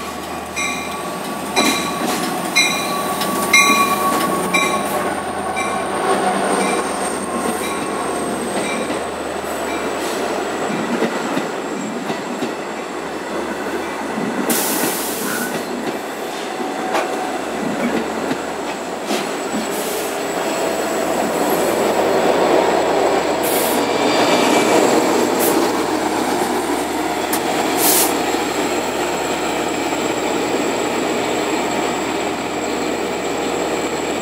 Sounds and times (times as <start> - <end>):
Railroad car, train wagon: 0.0 - 34.2
Train: 0.0 - 34.2.